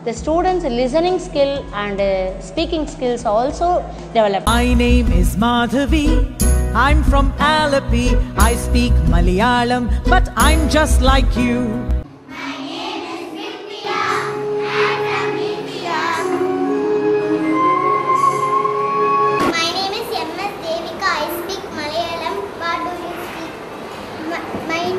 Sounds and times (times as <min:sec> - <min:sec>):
Speech: 0:00.0 - 0:04.5
Music: 0:00.0 - 0:12.1, 0:13.0 - 0:19.6.